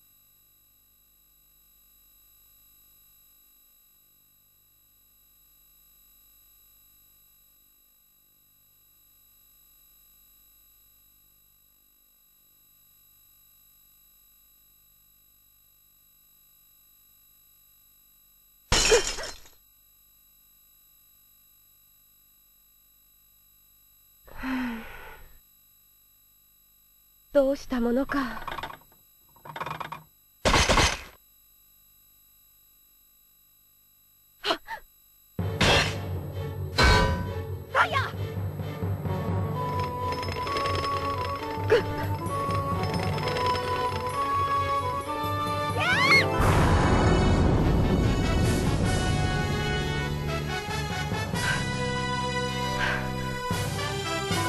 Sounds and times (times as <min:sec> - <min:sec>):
Speech: 0:27.4 - 0:28.5, 0:37.8 - 0:38.2
Music: 0:35.4 - 0:54.4.